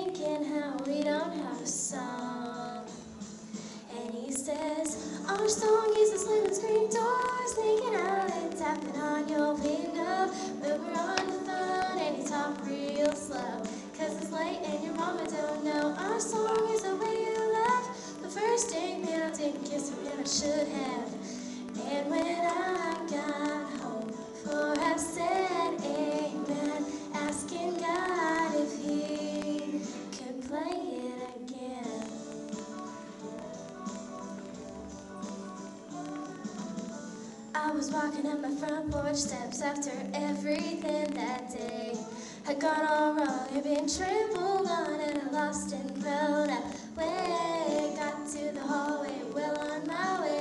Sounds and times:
Female singing: 0.0 - 3.2, 3.8 - 33.1, 37.3 - 50.4
Music: 0.0 - 50.4.

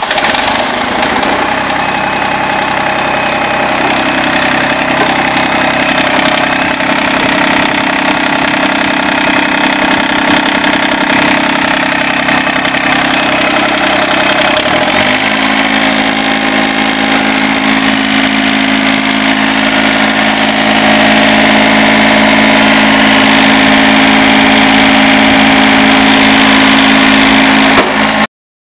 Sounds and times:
Heavy engine (low frequency): 0.0 - 28.3
Idling: 0.0 - 28.3
Medium engine (mid frequency): 0.0 - 28.3
Vehicle: 0.0 - 28.3.

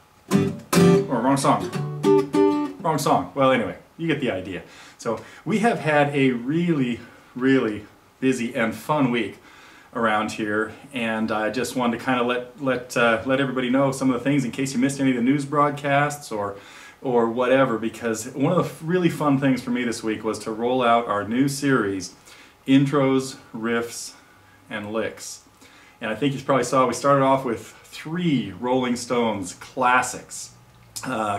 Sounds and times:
Guitar: 0.0 - 3.8
Speech: 1.0 - 1.7, 2.8 - 9.4, 10.0 - 31.3.

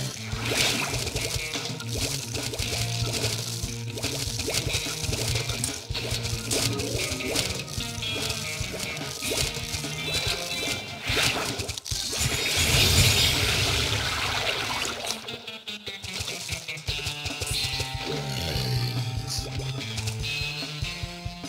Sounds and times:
Music: 0.0 - 13.8, 14.6 - 21.4.

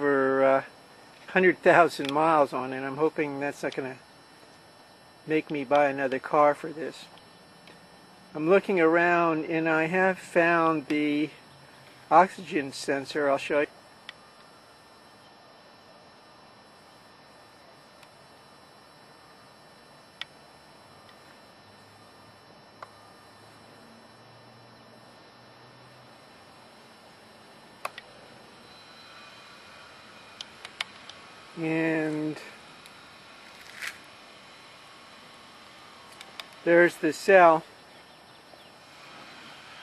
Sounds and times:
Speech: 1.3 - 4.0, 5.3 - 7.1, 8.4 - 11.4, 12.1 - 13.7, 31.6 - 32.6, 36.6 - 37.7.

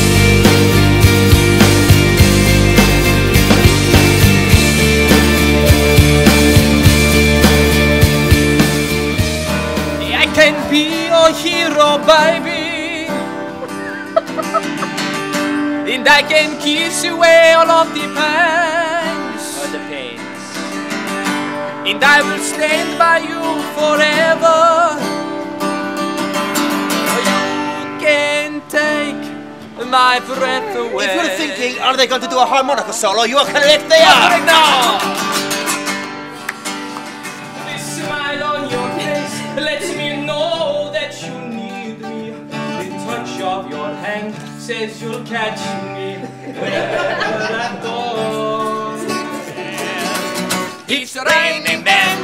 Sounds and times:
Music: 0.0 - 52.2
Male singing: 10.0 - 13.3, 15.9 - 20.1, 21.9 - 25.0, 27.1 - 32.6, 33.6 - 35.0, 37.6 - 52.2.

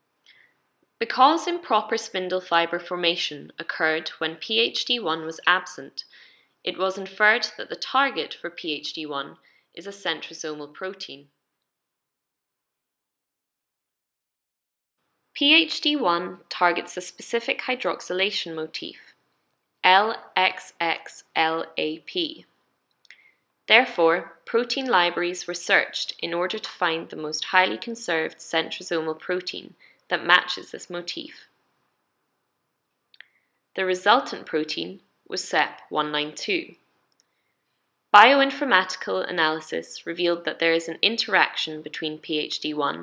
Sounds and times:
Speech: 1.0 - 11.4, 15.4 - 19.2, 19.8 - 22.5, 23.7 - 31.5, 33.8 - 36.8, 38.2 - 43.0.

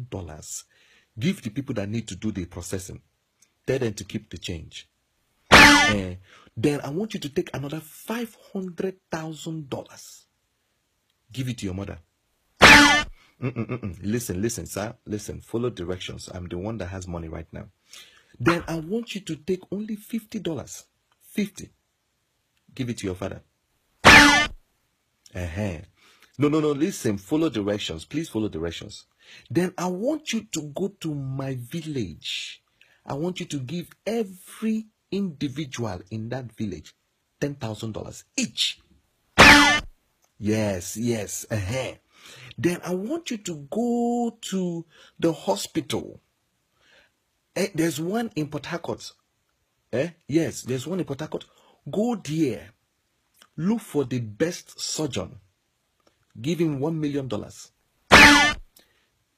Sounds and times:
Speech: 0.0 - 3.0, 3.6 - 4.9, 5.5 - 10.3, 11.3 - 12.1, 13.4 - 17.7, 18.4 - 21.8, 22.7 - 23.5, 25.3 - 38.8, 40.4 - 46.2, 47.6 - 49.2, 49.9 - 52.8, 53.4 - 55.4, 56.3 - 58.4.

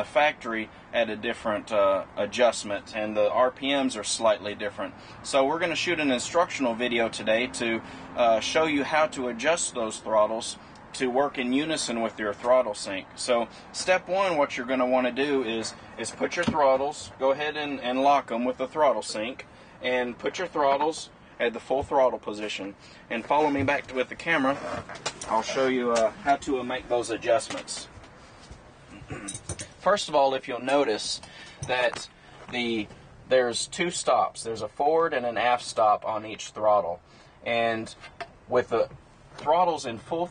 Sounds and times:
Speech: 0.0 - 27.9, 29.8 - 40.3
Vehicle: 0.0 - 40.3.

